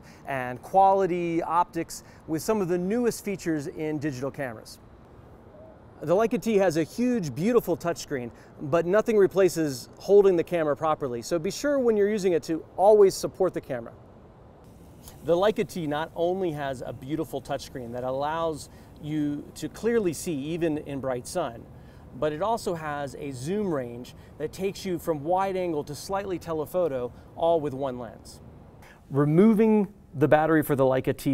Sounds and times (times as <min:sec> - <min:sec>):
Speech: 0:00.3 - 0:04.8, 0:06.0 - 0:14.0, 0:15.2 - 0:28.4, 0:29.1 - 0:31.3.